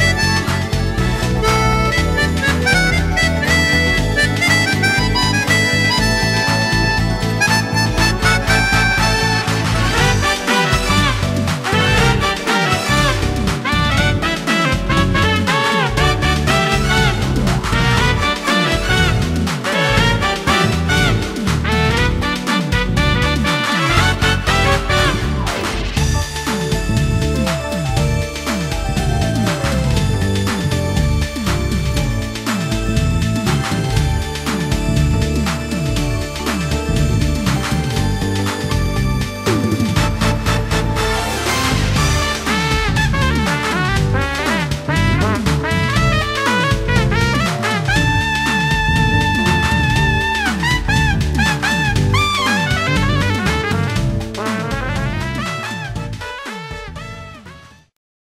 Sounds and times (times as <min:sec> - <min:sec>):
Music: 0:00.0 - 0:58.0.